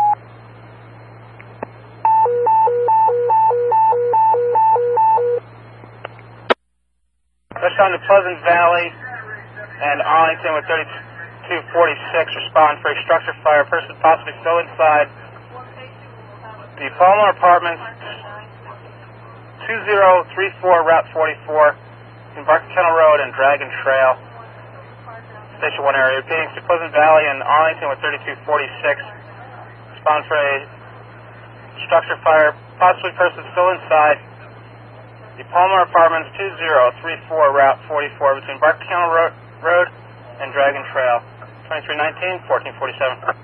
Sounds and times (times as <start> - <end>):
Speech: 7.6 - 43.4.